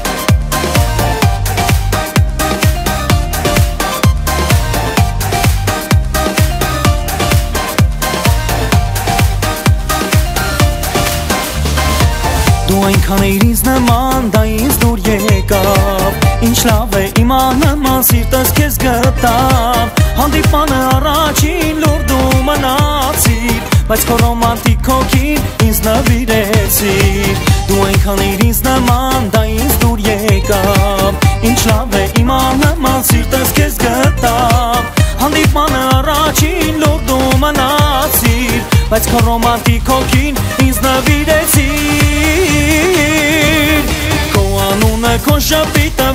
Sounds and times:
Dance music: 0.0s - 46.1s
Jazz: 0.0s - 46.1s
New-age music: 0.0s - 46.1s
Rhythm and blues: 0.0s - 46.1s.

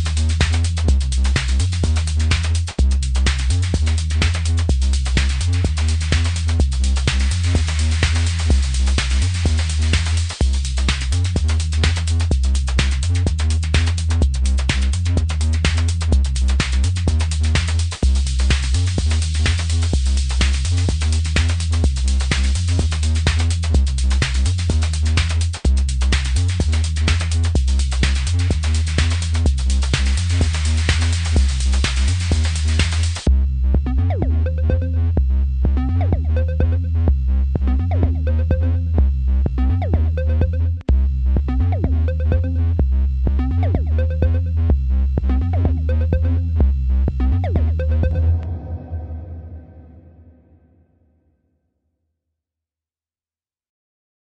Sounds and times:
Drum machine: 0.0s - 48.5s.

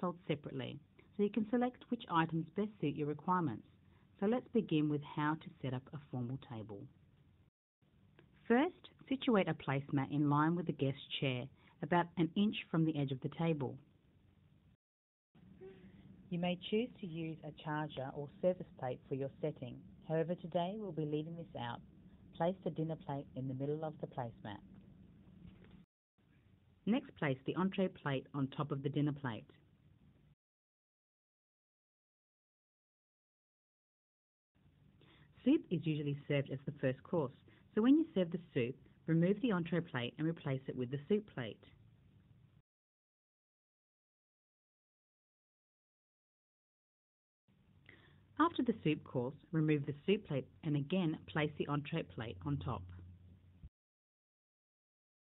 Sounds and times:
Speech: 0.0s - 6.9s, 8.4s - 13.9s, 15.6s - 21.8s, 22.4s - 24.6s, 26.9s - 29.6s, 35.4s - 41.8s, 48.4s - 52.9s.

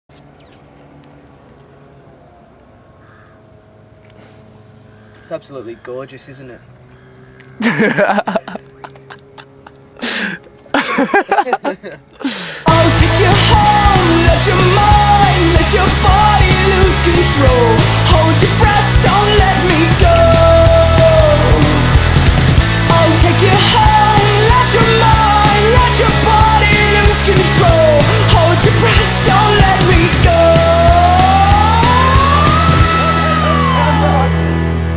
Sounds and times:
Speech: 5.2s - 6.7s.

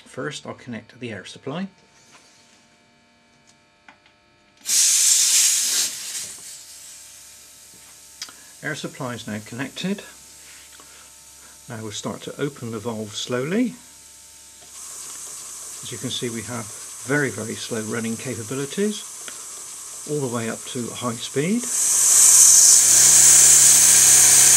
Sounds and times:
Sizzle: 4.7s - 8.6s, 14.6s - 24.5s.

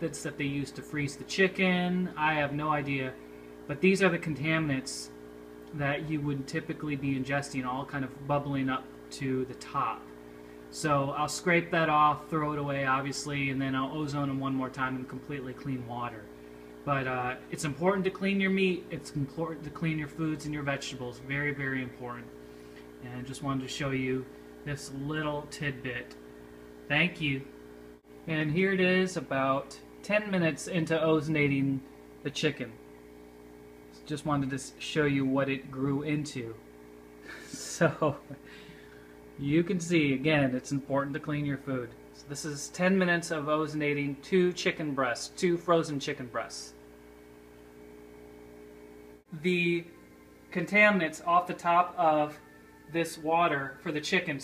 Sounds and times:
Speech: 0.0s - 10.1s, 10.7s - 16.3s, 16.9s - 22.3s, 23.0s - 26.2s, 26.9s - 27.5s, 28.3s - 32.8s, 34.0s - 36.6s, 39.4s - 46.8s, 49.3s - 50.0s, 50.6s - 54.4s.

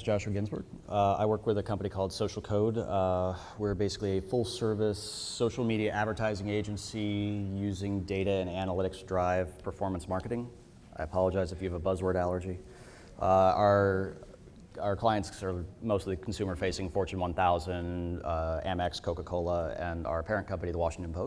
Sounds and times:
Speech: 0.0s - 12.6s, 13.2s - 21.2s.

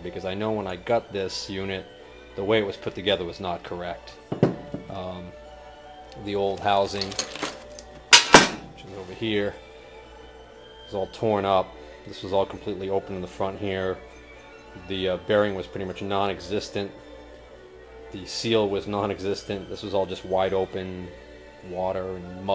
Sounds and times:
Speech: 0.0s - 4.2s, 4.9s - 5.3s, 6.2s - 7.1s, 8.8s - 9.6s, 10.9s - 14.0s, 14.8s - 16.9s, 18.1s - 22.5s
Music: 0.0s - 22.5s.

